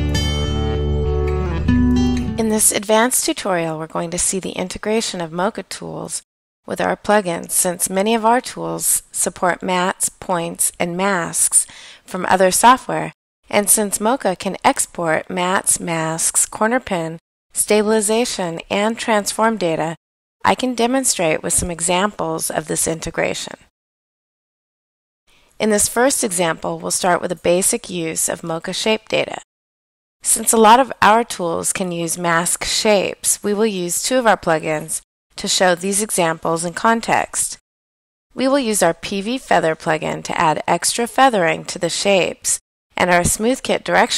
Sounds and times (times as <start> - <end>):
Speech: 2.4 - 23.7, 25.6 - 29.5, 30.3 - 37.6, 38.4 - 44.1.